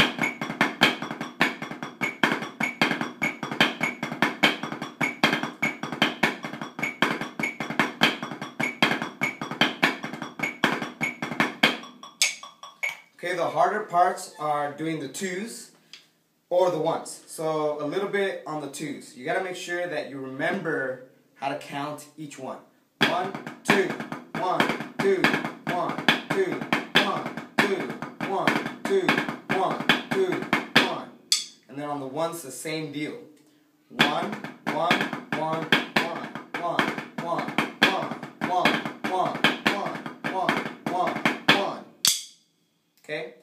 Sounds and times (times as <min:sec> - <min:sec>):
Drum: 0:00.0 - 0:13.1, 0:23.0 - 0:31.5, 0:34.0 - 0:42.3
Inside, small room: 0:00.0 - 0:43.4.